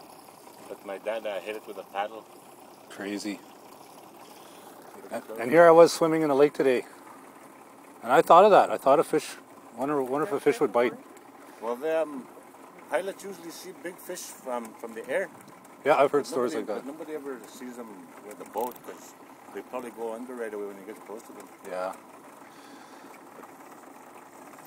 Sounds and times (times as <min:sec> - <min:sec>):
Sailboat, sailing ship: 0:00.0 - 0:24.6
Speech: 0:00.7 - 0:02.2, 0:02.9 - 0:03.4, 0:05.0 - 0:06.9, 0:12.9 - 0:22.0.